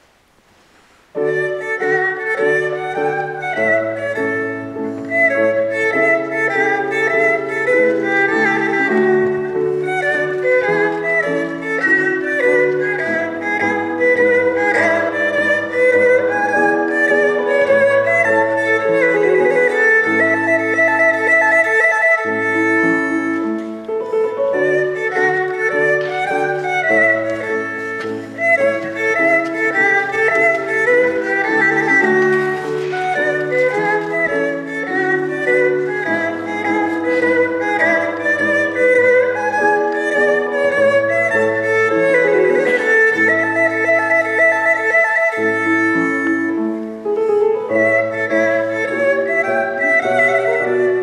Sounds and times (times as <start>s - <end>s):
Violin, fiddle: 1.2s - 51.0s.